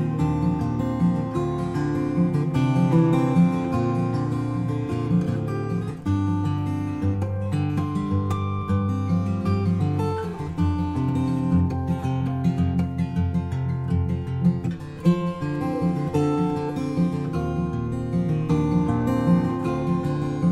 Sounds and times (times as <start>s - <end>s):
Music: 0.0s - 20.5s.